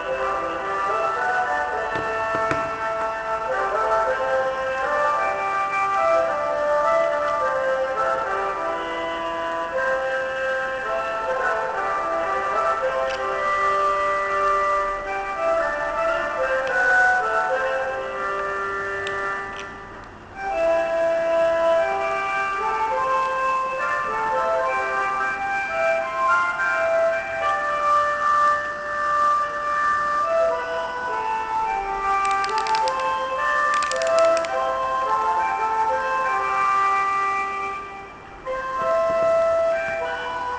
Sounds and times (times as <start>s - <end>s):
Music: 0.0s - 40.5s.